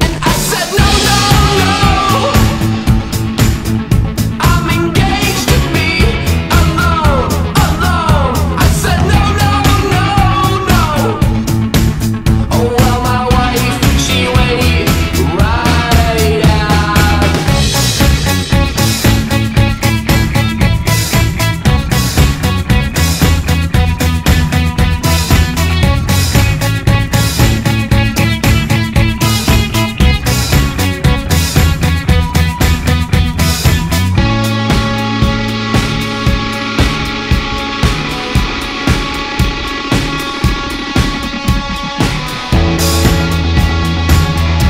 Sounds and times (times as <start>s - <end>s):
Grunge: 0.0s - 44.7s.